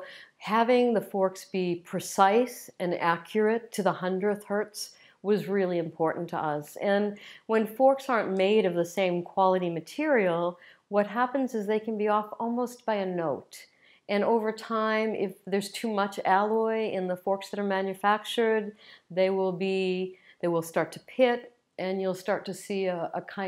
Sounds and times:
Speech: 0:00.0 - 0:23.4.

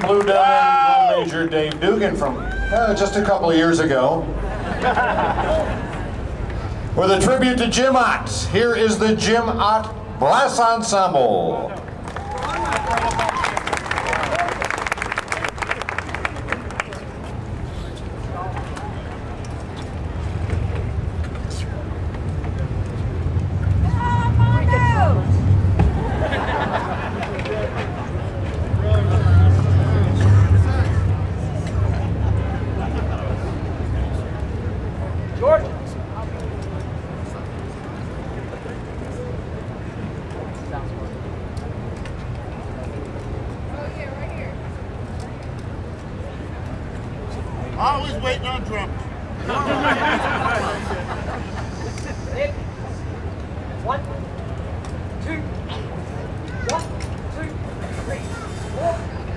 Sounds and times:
Applause: 0:00.0 - 0:00.6, 0:11.9 - 0:17.2
Crowd: 0:00.0 - 0:59.3
Hubbub, speech noise, speech babble: 0:00.0 - 0:59.3
Clapping: 0:11.8 - 0:17.1.

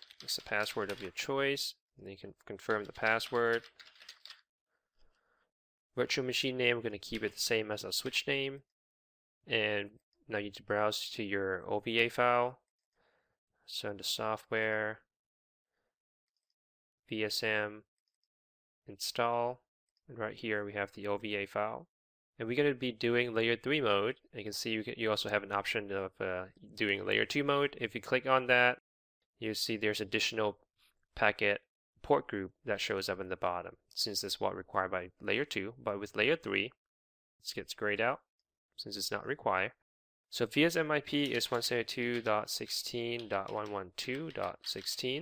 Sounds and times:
Speech: 0:00.2 - 0:03.7, 0:06.0 - 0:08.7, 0:09.5 - 0:12.6, 0:13.7 - 0:15.1, 0:17.1 - 0:17.9, 0:18.9 - 0:28.8, 0:29.4 - 0:30.6, 0:31.2 - 0:36.8, 0:37.4 - 0:45.2.

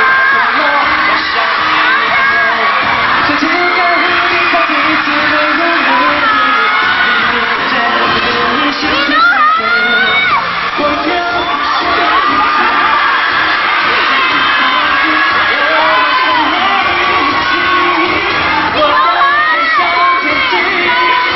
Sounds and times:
Music: 0:00.0 - 0:21.3.

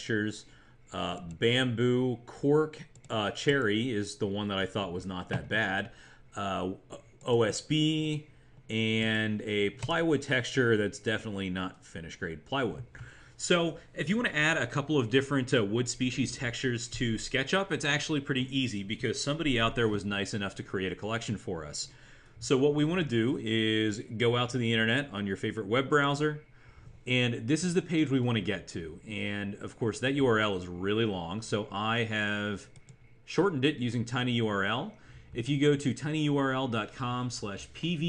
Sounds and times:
Speech: 0:00.0 - 0:26.5, 0:27.1 - 0:38.0.

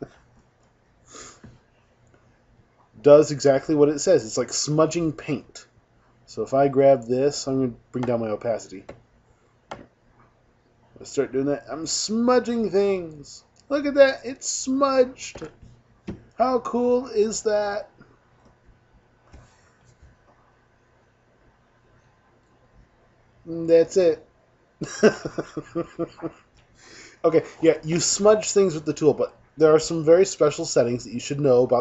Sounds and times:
Speech: 0:03.0 - 0:05.7, 0:06.3 - 0:08.9, 0:11.0 - 0:15.5, 0:16.4 - 0:18.0, 0:23.5 - 0:24.2, 0:27.2 - 0:31.8.

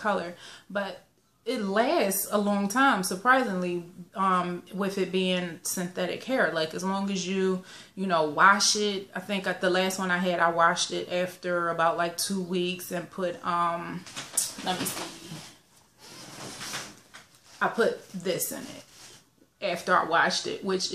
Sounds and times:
Speech: 0:00.0 - 0:15.5, 0:17.6 - 0:18.9, 0:19.6 - 0:20.9.

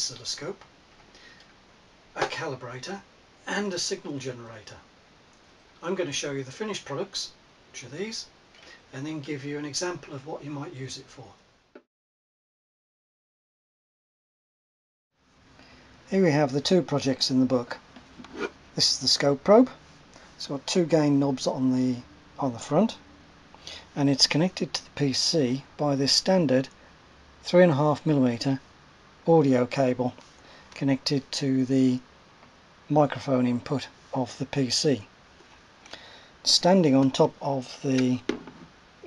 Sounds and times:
Speech: 0:00.0 - 0:00.6, 0:02.2 - 0:04.9, 0:05.8 - 0:08.3, 0:08.9 - 0:11.4, 0:16.1 - 0:17.8, 0:18.8 - 0:19.8, 0:20.4 - 0:23.0, 0:24.0 - 0:26.8, 0:27.4 - 0:28.6, 0:29.2 - 0:30.2, 0:30.8 - 0:32.0, 0:32.9 - 0:35.1, 0:36.4 - 0:38.3.

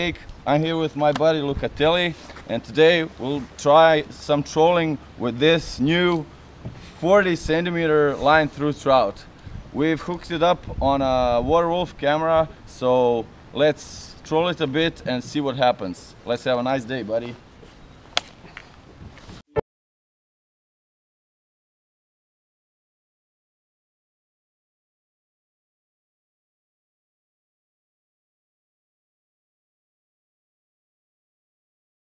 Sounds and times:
Speech: 0:00.0 - 0:06.3, 0:07.0 - 0:17.4.

